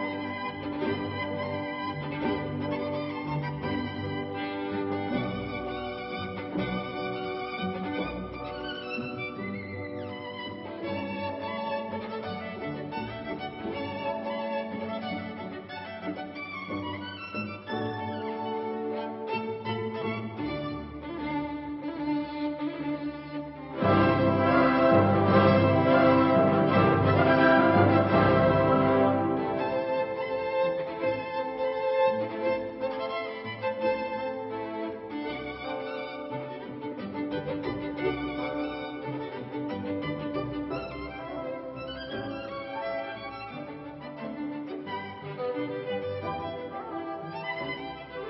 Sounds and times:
Violin, fiddle: 0.0 - 48.3.

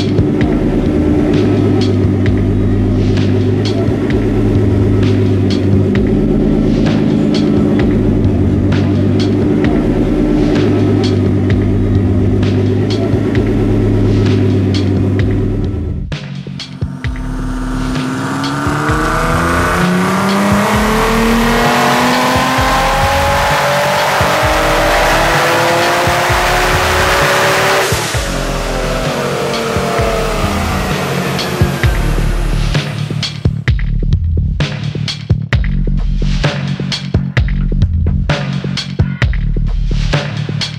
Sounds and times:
Music: 0.0 - 40.7.

